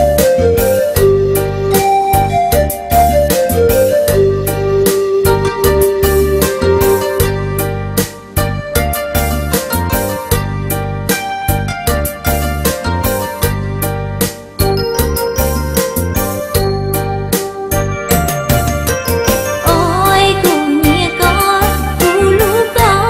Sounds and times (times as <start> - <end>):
Jingle, tinkle: 14.6 - 20.4.